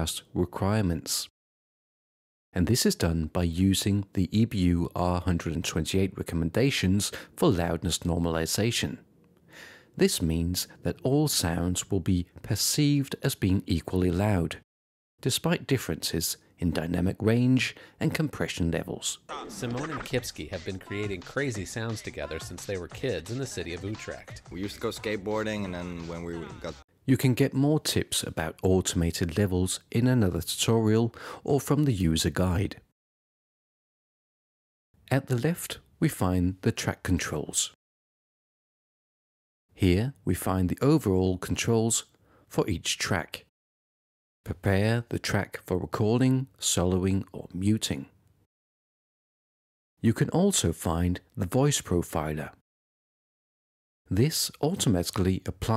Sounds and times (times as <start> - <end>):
Speech: 0.0 - 1.3, 2.6 - 9.0, 10.0 - 14.6, 15.2 - 32.9, 35.1 - 37.8, 39.8 - 43.5, 44.5 - 48.2, 50.0 - 52.6, 54.1 - 55.7.